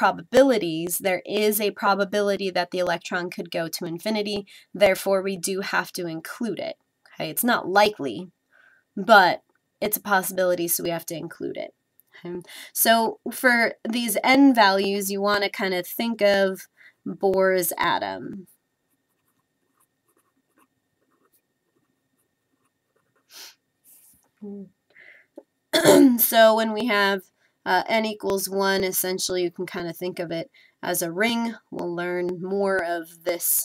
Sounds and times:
Speech: 0:00.0 - 0:08.3, 0:09.0 - 0:18.5, 0:24.4 - 0:24.7, 0:25.8 - 0:33.6
Inside, small room: 0:00.0 - 0:33.6.

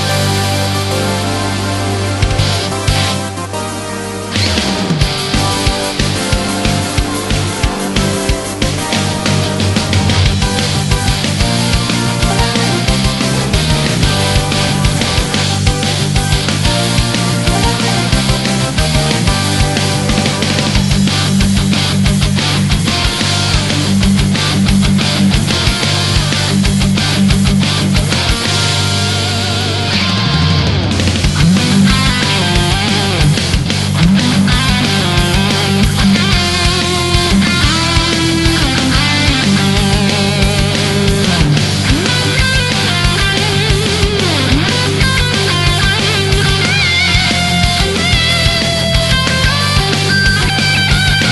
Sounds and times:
Heavy metal: 0:00.0 - 0:51.3.

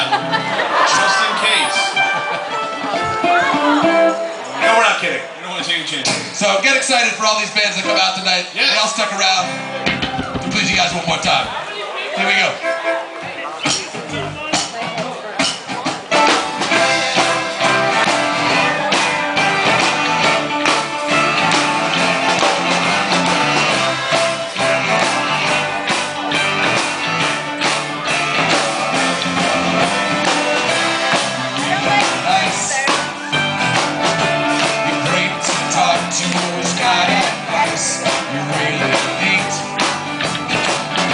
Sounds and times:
Music: 0:00.0 - 0:41.1
Speech: 0:10.5 - 0:16.0.

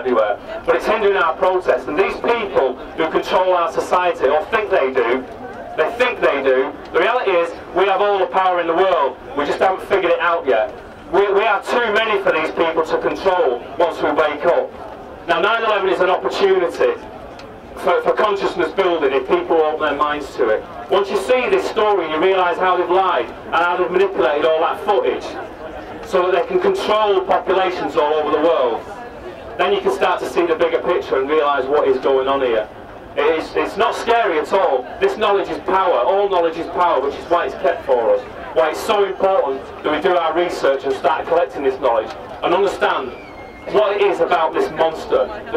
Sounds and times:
Male speech, man speaking: 0:00.0 - 0:14.7, 0:15.3 - 0:17.0, 0:17.8 - 0:45.5.

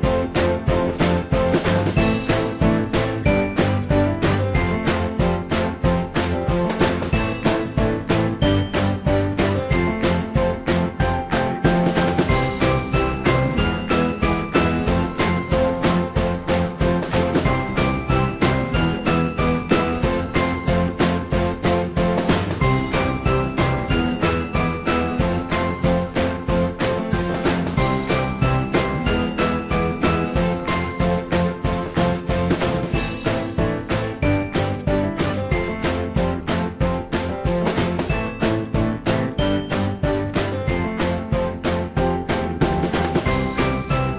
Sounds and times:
Music: 0:00.0 - 0:44.1.

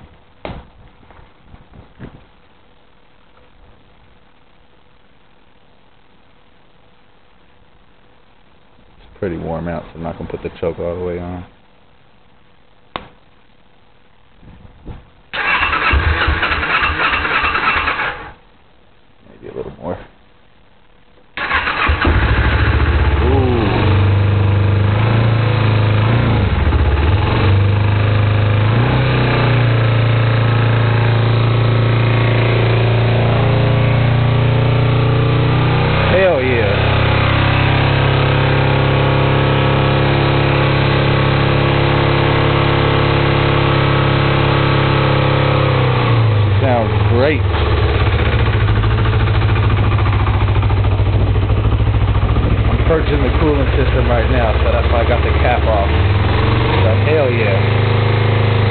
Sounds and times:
Vehicle: 0:15.4 - 0:18.4, 0:21.4 - 0:58.7
Accelerating, revving, vroom: 0:28.6 - 0:29.6, 0:56.0 - 0:58.7.

